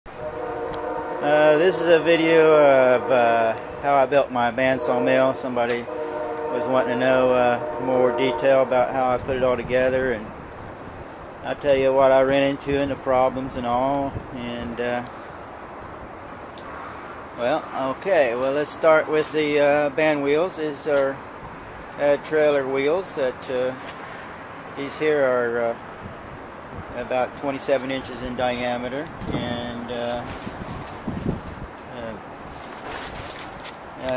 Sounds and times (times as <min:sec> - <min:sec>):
Train horn: 0:00.1 - 0:08.7.